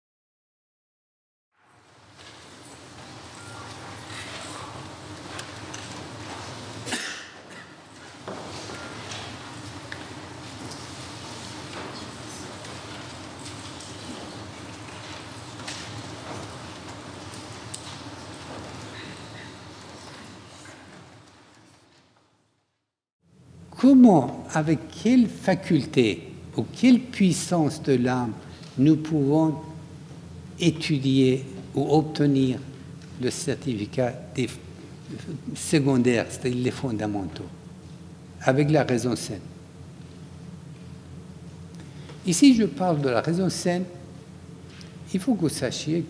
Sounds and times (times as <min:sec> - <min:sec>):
Speech: 0:23.7 - 0:29.8, 0:30.6 - 0:37.6, 0:38.4 - 0:39.5, 0:42.2 - 0:44.0, 0:45.1 - 0:46.1.